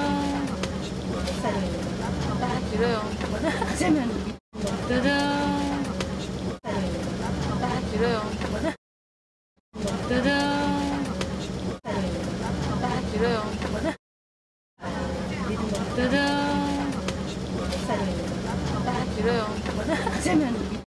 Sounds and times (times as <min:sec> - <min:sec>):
Speech: 0:00.0 - 0:08.8, 0:09.8 - 0:14.0, 0:14.8 - 0:20.8.